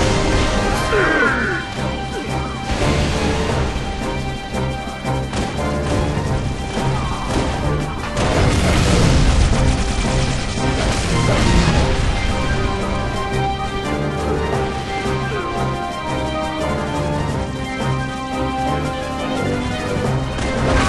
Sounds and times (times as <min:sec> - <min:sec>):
Music: 0:00.0 - 0:20.8.